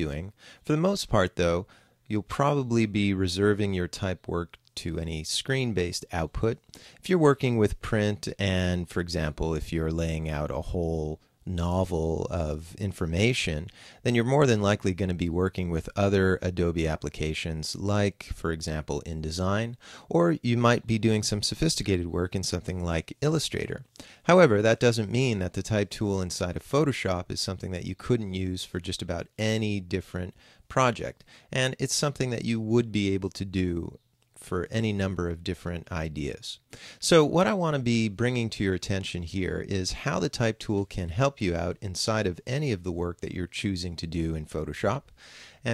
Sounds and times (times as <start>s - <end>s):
Speech: 0.0s - 45.7s.